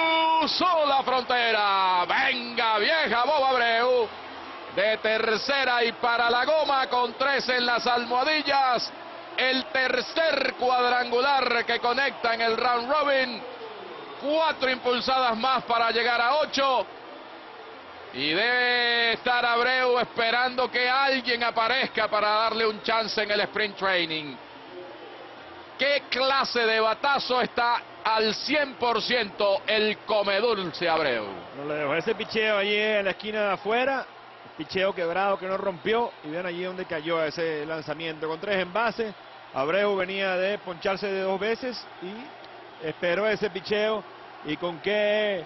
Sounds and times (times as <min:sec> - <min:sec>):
Speech: 0:00.0 - 0:04.1, 0:04.8 - 0:13.6, 0:14.2 - 0:16.9, 0:18.2 - 0:24.9, 0:25.8 - 0:45.4.